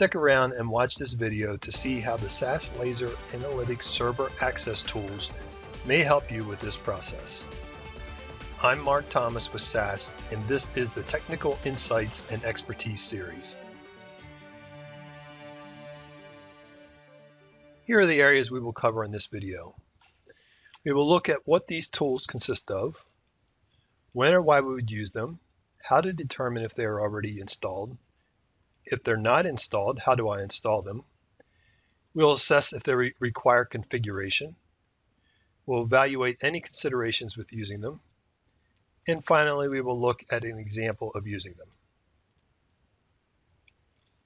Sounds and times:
Speech: 0:00.0 - 0:07.5, 0:08.6 - 0:13.6, 0:17.9 - 0:19.7, 0:20.9 - 0:23.0, 0:24.2 - 0:28.0, 0:28.9 - 0:31.0, 0:32.2 - 0:34.5, 0:35.7 - 0:38.0, 0:39.1 - 0:41.6
Music: 0:01.4 - 0:18.6.

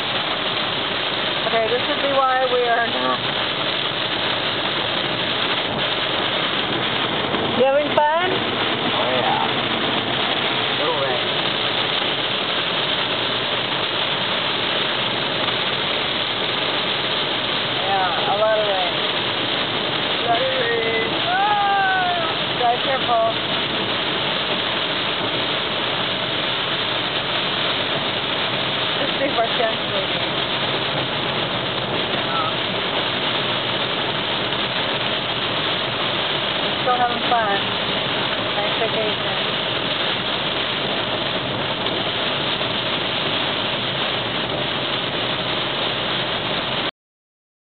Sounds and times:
Speech: 0:20.2 - 0:23.4, 0:32.2 - 0:32.6.

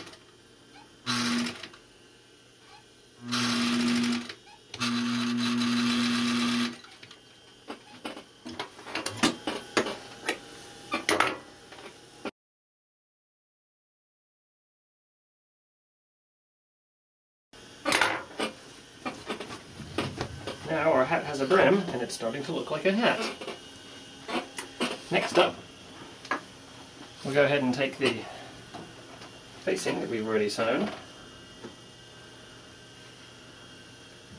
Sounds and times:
Sewing machine: 0:00.0 - 0:00.2, 0:01.1 - 0:01.8, 0:03.2 - 0:07.2.

